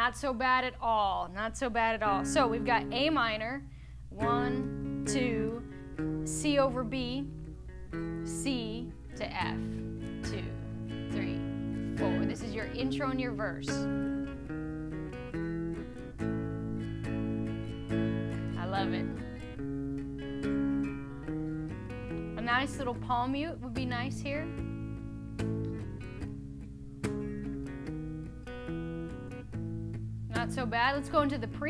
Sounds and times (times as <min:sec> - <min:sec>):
Speech: 0:00.0 - 0:03.6, 0:04.2 - 0:05.6, 0:08.3 - 0:09.6, 0:10.3 - 0:10.6, 0:12.0 - 0:13.8, 0:18.6 - 0:19.2, 0:22.4 - 0:24.5, 0:30.3 - 0:31.7
Strum: 0:02.0 - 0:31.7.